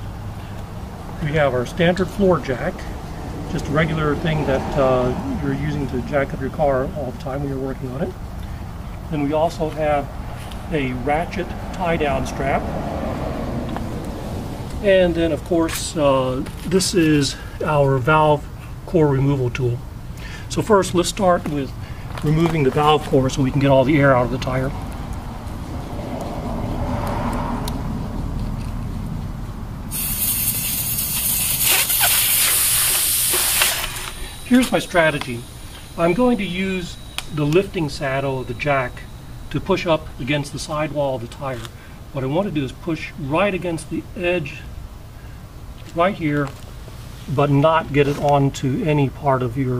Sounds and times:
Speech: 1.2 - 2.9, 3.5 - 8.2, 9.1 - 12.7, 14.8 - 19.8, 20.5 - 24.8, 34.5 - 44.7, 45.9 - 46.6, 47.3 - 49.7.

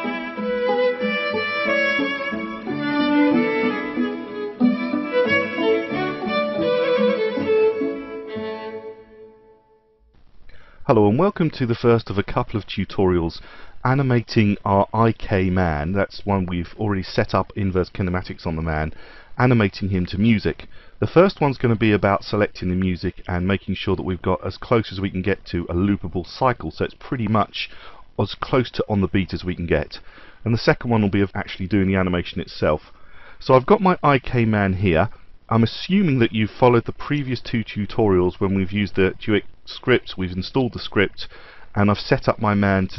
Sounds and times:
Speech: 10.8 - 42.9.

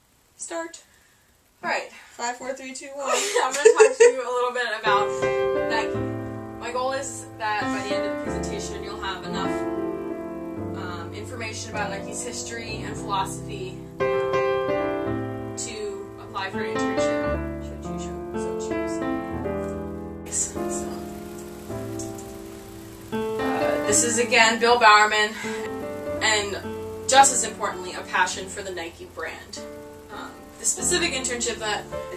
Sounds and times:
Narration, monologue: 0.0 - 14.3, 15.2 - 32.1
Female speech, woman speaking: 0.4 - 0.8, 1.6 - 6.0, 6.6 - 9.7, 10.8 - 13.8, 15.6 - 19.0, 20.3 - 21.0, 23.6 - 25.6, 26.2 - 32.1
Music: 4.8 - 32.1.

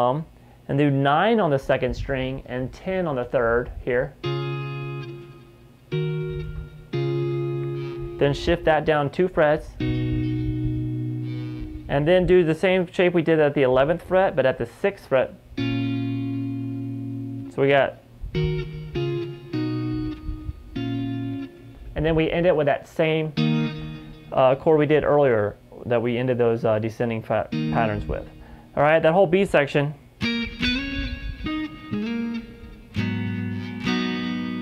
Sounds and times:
Speech: 0.0 - 4.2, 8.2 - 9.8, 11.9 - 15.4, 17.5 - 18.0, 22.0 - 23.4, 24.3 - 30.0
Guitar: 0.0 - 34.6.

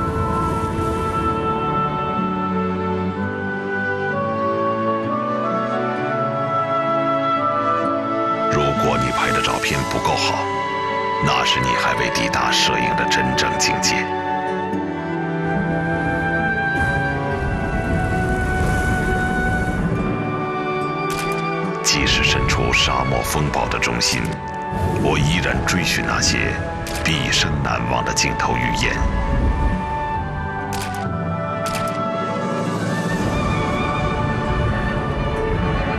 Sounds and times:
Music: 0.0 - 35.9
Speech: 8.5 - 10.5, 11.2 - 14.1, 21.9 - 24.4, 25.0 - 29.1.

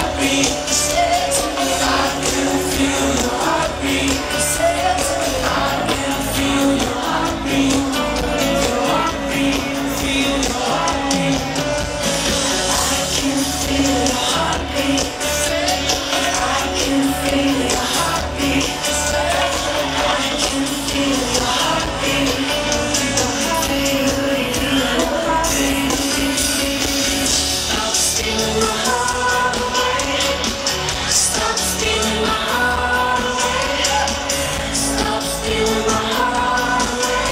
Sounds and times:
Music: 0.0 - 37.3.

